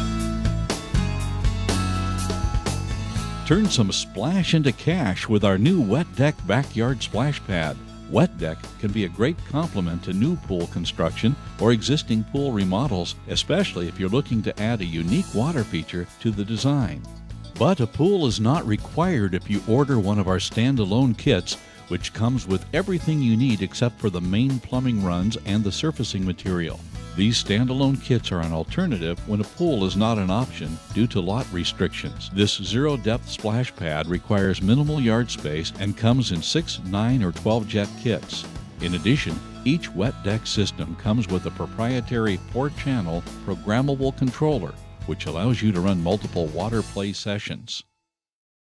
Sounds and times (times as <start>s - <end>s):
Music: 0.0s - 48.2s
Speech: 3.5s - 47.9s.